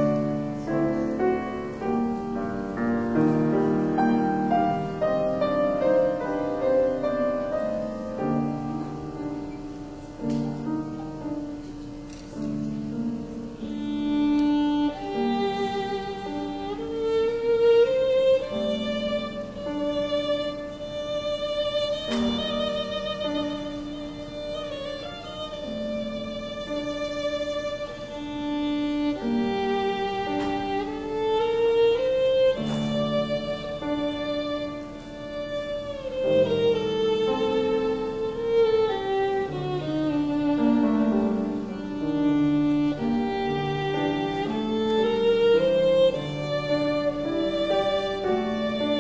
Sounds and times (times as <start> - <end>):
Violin, fiddle: 0.0 - 49.0.